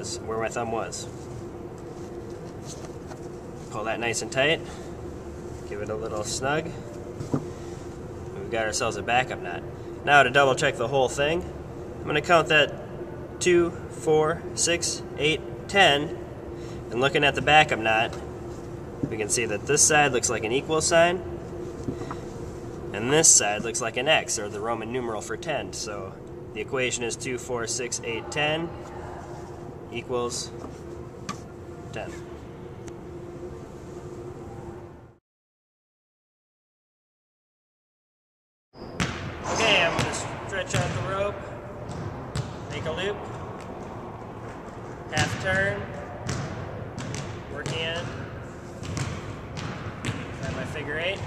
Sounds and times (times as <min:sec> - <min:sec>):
Speech: 0:00.0 - 0:01.1, 0:03.7 - 0:04.6, 0:05.7 - 0:06.8, 0:08.4 - 0:11.5, 0:16.9 - 0:18.2, 0:19.1 - 0:21.2, 0:23.0 - 0:28.8, 0:29.9 - 0:30.5, 0:31.9 - 0:32.2, 0:39.5 - 0:41.4, 0:42.7 - 0:43.2, 0:45.1 - 0:45.9, 0:47.5 - 0:48.1, 0:50.4 - 0:51.2.